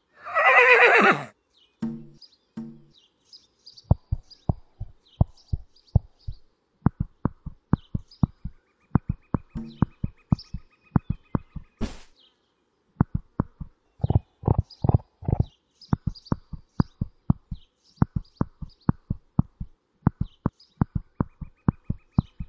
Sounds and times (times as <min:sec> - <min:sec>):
Horse: 0:13.1 - 0:16.5.